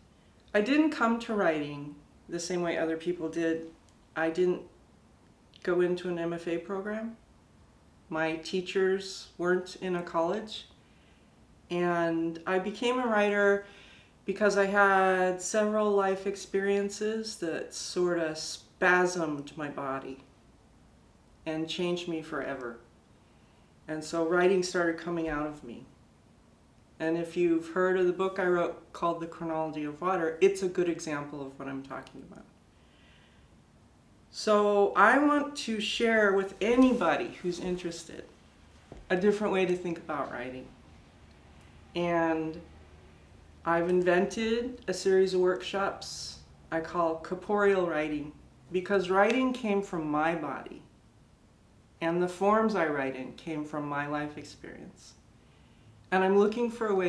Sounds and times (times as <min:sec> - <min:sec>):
Speech: 0:00.5 - 0:04.8, 0:05.6 - 0:07.2, 0:08.1 - 0:10.7, 0:11.7 - 0:13.7, 0:14.3 - 0:20.3, 0:21.4 - 0:22.9, 0:23.9 - 0:25.9, 0:27.0 - 0:32.6, 0:34.3 - 0:38.3, 0:39.0 - 0:40.8, 0:41.9 - 0:42.7, 0:43.6 - 0:50.9, 0:52.0 - 0:55.2, 0:56.1 - 0:57.0.